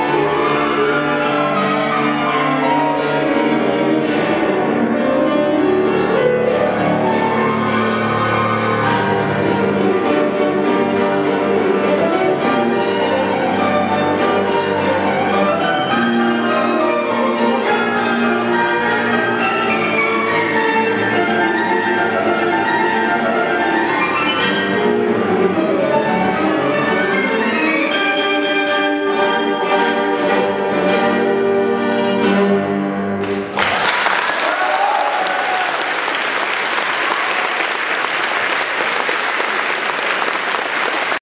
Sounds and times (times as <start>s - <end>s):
Cello: 0.0s - 33.3s
Orchestra: 0.0s - 41.2s
Piano: 0.0s - 41.2s
Violin, fiddle: 6.2s - 32.8s
Applause: 33.2s - 41.2s.